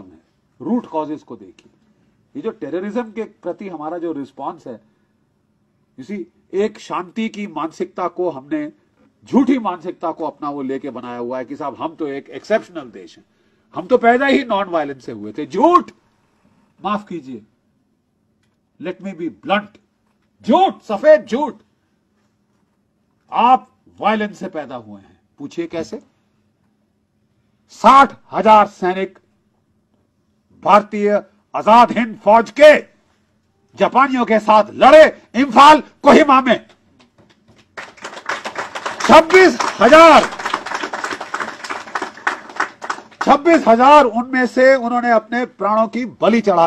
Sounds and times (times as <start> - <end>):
Male speech, man speaking: 0.0 - 1.7, 2.3 - 4.8, 6.0 - 13.2, 13.8 - 16.0, 16.8 - 17.5, 18.8 - 19.8, 20.4 - 21.6, 23.3 - 26.1, 27.7 - 29.2, 30.6 - 32.9, 33.8 - 36.7, 39.0 - 40.3, 43.2 - 46.6
Narration, monologue: 0.0 - 46.6.